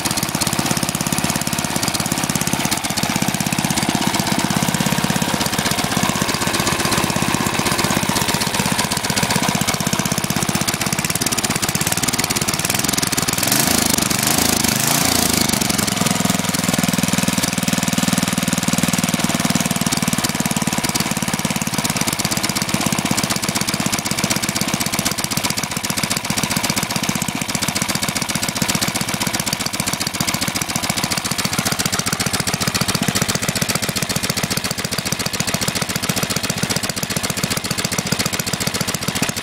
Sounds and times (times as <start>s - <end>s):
Idling: 0.0s - 39.4s.